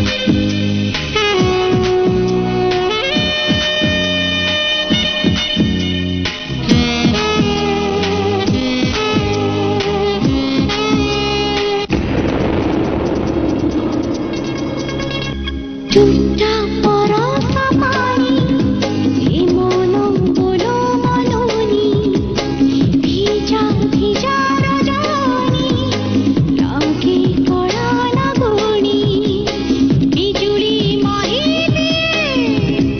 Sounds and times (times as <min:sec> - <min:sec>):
Music: 0:00.0 - 0:32.9.